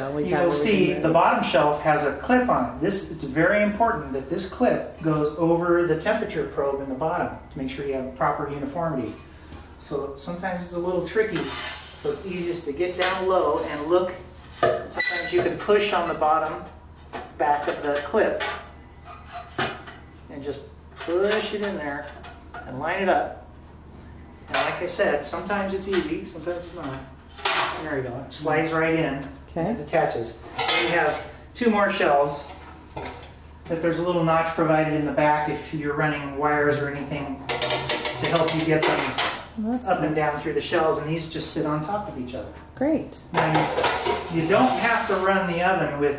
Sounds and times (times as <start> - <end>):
Speech: 0.0 - 9.2, 9.8 - 14.2, 14.8 - 16.8, 17.4 - 18.4, 20.3 - 23.4, 24.5 - 27.1, 27.7 - 32.6, 33.7 - 37.4, 38.2 - 46.1
Inside, small room: 0.0 - 46.1.